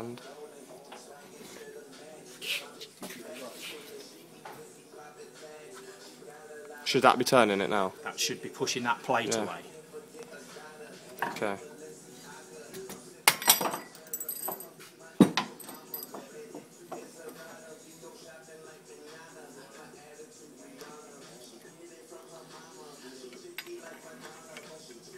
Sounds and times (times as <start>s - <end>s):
Music: 0.0s - 25.1s.